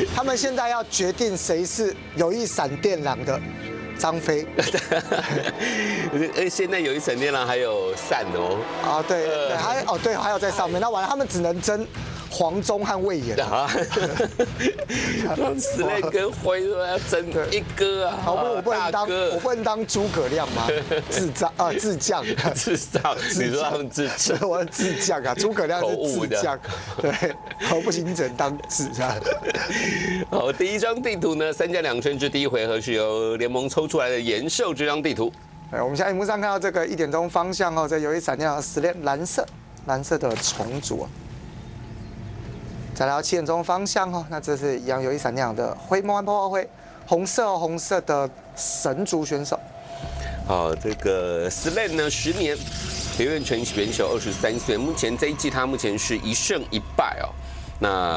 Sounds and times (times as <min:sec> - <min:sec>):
Speech: 0:00.0 - 0:03.4, 0:04.0 - 0:14.1, 0:15.2 - 0:29.6, 0:30.2 - 0:41.1, 0:43.0 - 0:49.6, 0:50.5 - 0:58.1
Music: 0:00.0 - 0:40.3, 0:44.4 - 0:58.1.